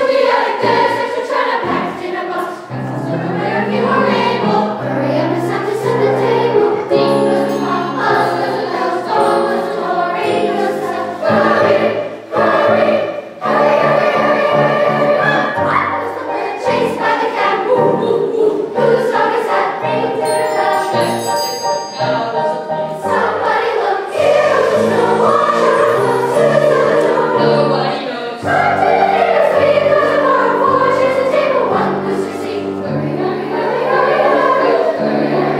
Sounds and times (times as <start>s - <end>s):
Jingle bell: 6.9s - 10.7s, 20.2s - 23.3s, 24.2s - 27.1s.